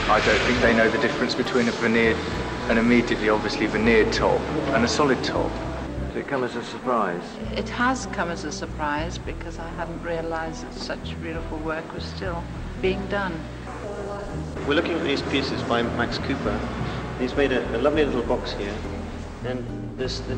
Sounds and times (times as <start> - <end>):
Speech: 0.0 - 5.6, 6.2 - 20.3
Music: 0.0 - 20.3.